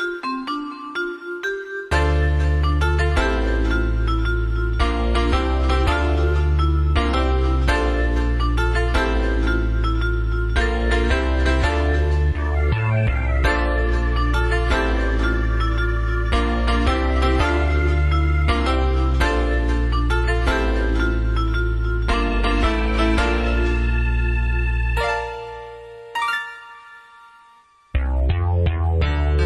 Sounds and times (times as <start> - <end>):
Music: 0.0 - 29.4.